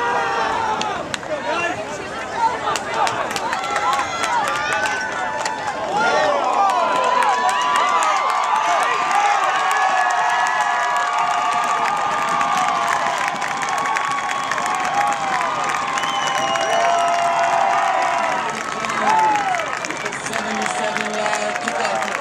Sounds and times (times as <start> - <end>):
Outside, urban or manmade: 0.0 - 22.2
Run: 0.0 - 22.2.